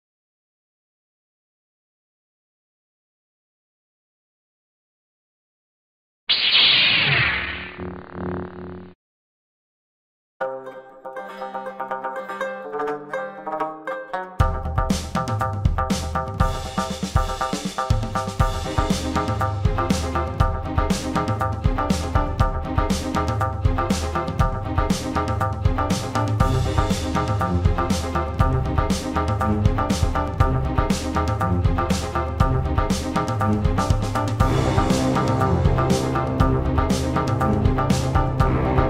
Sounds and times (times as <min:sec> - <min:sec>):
Banjo: 0:10.4 - 0:16.7, 0:18.4 - 0:38.8.